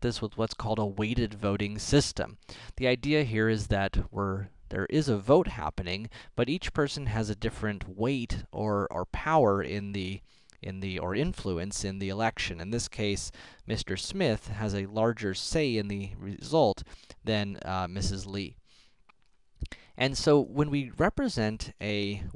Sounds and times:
Speech: 0:00.0 - 0:18.6, 0:20.0 - 0:22.3.

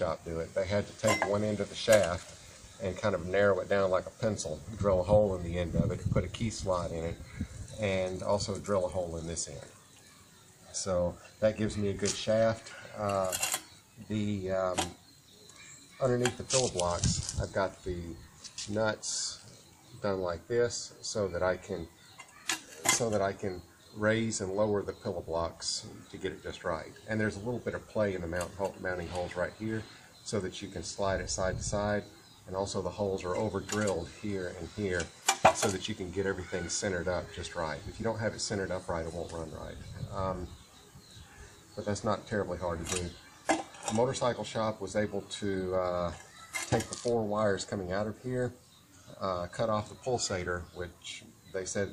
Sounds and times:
Speech: 0:00.0 - 0:02.2, 0:02.8 - 0:09.7, 0:10.7 - 0:13.4, 0:14.0 - 0:15.0, 0:16.0 - 0:21.9, 0:22.9 - 0:40.6, 0:41.8 - 0:43.2, 0:43.9 - 0:48.6, 0:49.2 - 0:51.9.

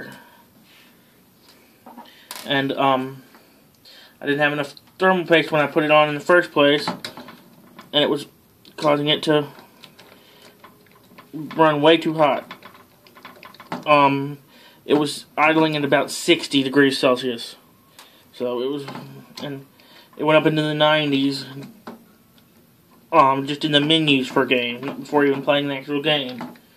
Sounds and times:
Speech: 0:02.5 - 0:03.2, 0:04.2 - 0:07.0, 0:07.9 - 0:09.6, 0:11.3 - 0:12.5, 0:13.9 - 0:17.6, 0:18.3 - 0:21.8, 0:23.1 - 0:26.6.

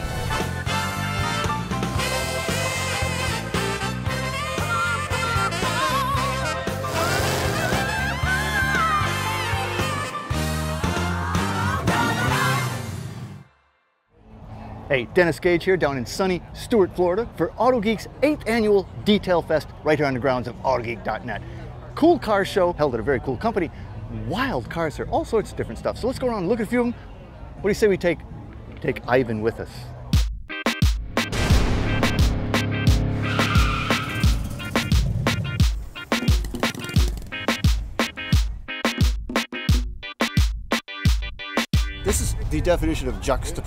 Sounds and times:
Music: 0:00.0 - 0:14.1, 0:30.0 - 0:43.6
Speech: 0:14.9 - 0:27.0, 0:27.6 - 0:28.2, 0:28.8 - 0:30.0, 0:42.0 - 0:43.6.

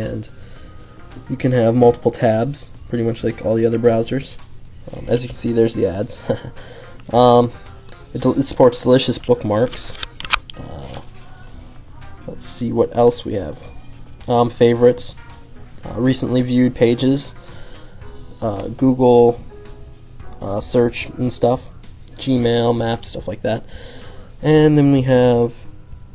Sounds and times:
Inside, small room: 0:00.0 - 0:26.1
Music: 0:00.0 - 0:26.1.

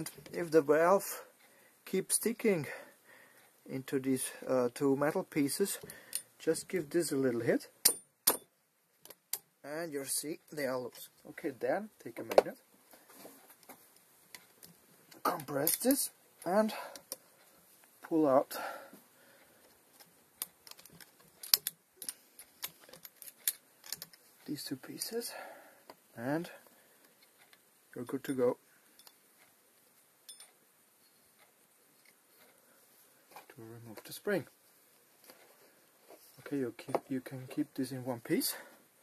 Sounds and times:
Speech: 0:00.0 - 0:02.8, 0:03.7 - 0:05.8, 0:06.4 - 0:07.7, 0:09.6 - 0:12.6, 0:15.2 - 0:17.0, 0:18.1 - 0:18.7, 0:24.4 - 0:25.4, 0:26.2 - 0:26.6, 0:27.9 - 0:28.6, 0:33.5 - 0:34.5, 0:36.4 - 0:38.7.

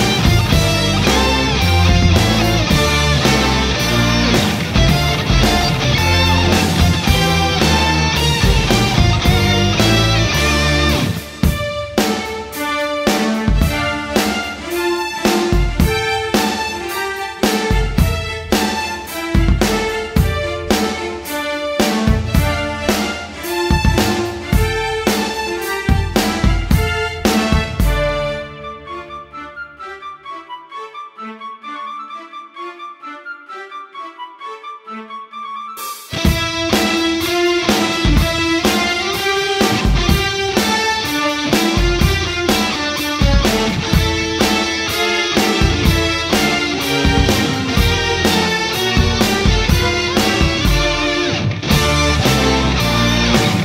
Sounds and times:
Music: 0:00.0 - 0:53.6.

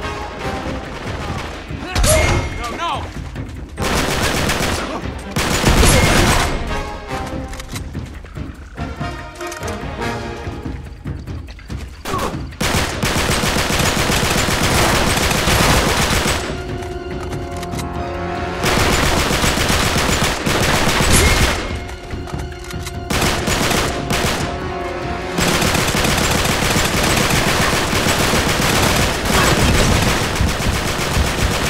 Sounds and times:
Music: 0:00.0 - 0:31.6
Fusillade: 0:03.8 - 0:06.7, 0:12.6 - 0:16.6, 0:18.6 - 0:21.9, 0:23.1 - 0:24.6, 0:25.4 - 0:31.6.

